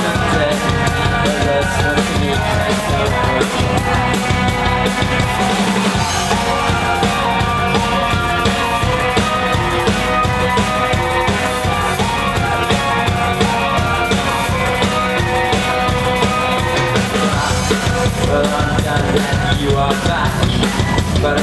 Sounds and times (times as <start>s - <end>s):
Music: 0.0s - 21.4s.